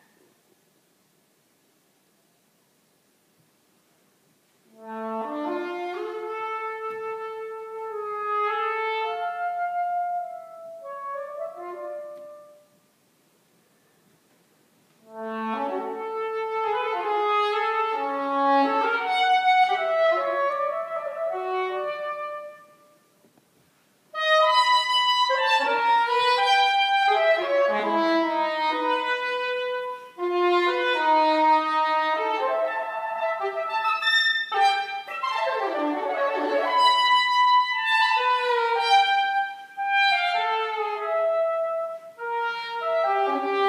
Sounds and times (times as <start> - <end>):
Trumpet: 4.7 - 12.8, 15.0 - 23.3, 24.1 - 43.6.